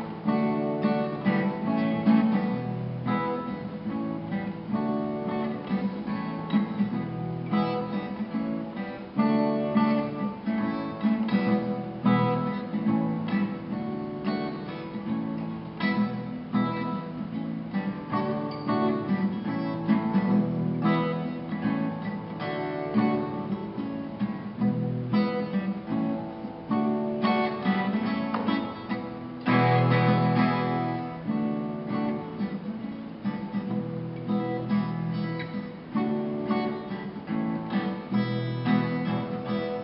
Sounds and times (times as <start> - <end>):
Music: 0.0 - 39.8.